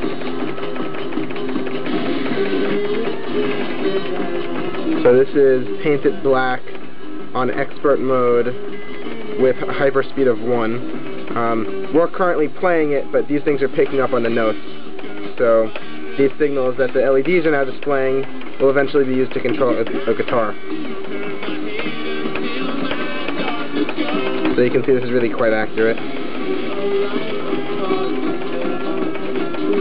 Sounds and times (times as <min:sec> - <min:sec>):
Music: 0:00.0 - 0:29.8
Speech: 0:05.0 - 0:06.7, 0:07.4 - 0:08.6, 0:09.4 - 0:10.8, 0:11.4 - 0:14.6, 0:15.4 - 0:20.6, 0:24.6 - 0:26.0.